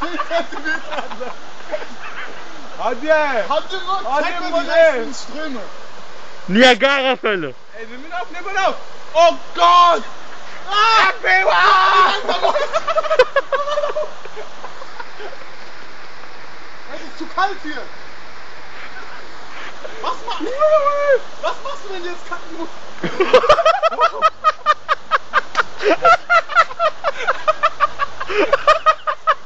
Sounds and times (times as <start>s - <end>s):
Stream: 0.0s - 29.4s.